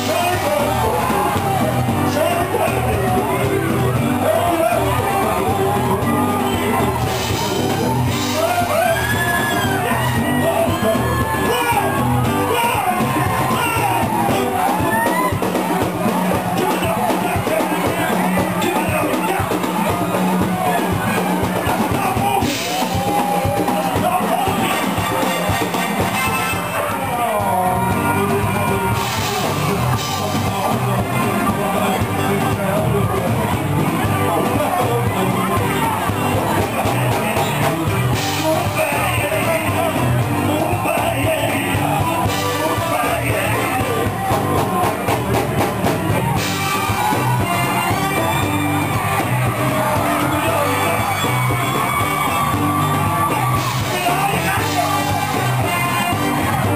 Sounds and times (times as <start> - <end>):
Blues: 0.0 - 56.7
Shout: 0.0 - 56.7.